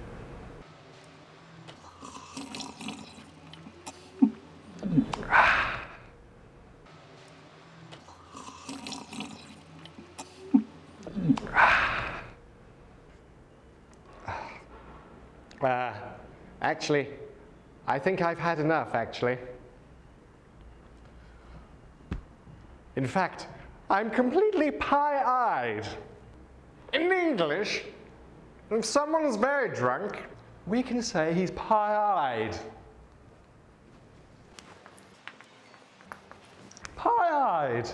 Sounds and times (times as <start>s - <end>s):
Speech: 15.6s - 17.3s, 17.9s - 19.6s, 23.0s - 26.1s, 26.9s - 28.0s, 28.7s - 32.8s, 37.0s - 37.9s.